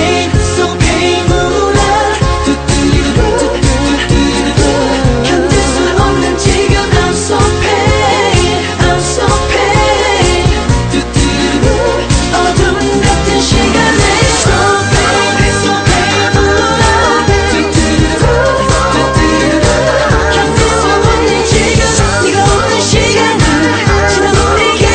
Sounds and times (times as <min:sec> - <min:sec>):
Disco: 0:00.0 - 0:24.9.